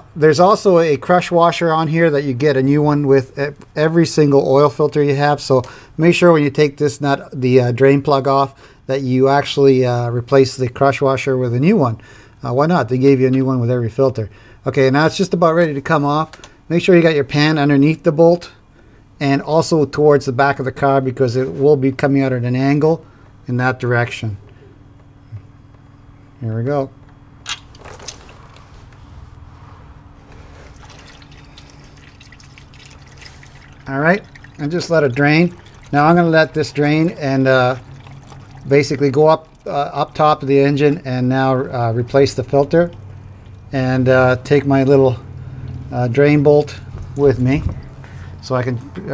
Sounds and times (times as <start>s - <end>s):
Speech: 0.2s - 18.6s, 19.2s - 24.4s, 26.4s - 27.0s, 33.9s - 37.8s, 38.7s - 43.0s, 43.7s - 45.2s, 45.9s - 47.7s, 48.4s - 49.1s.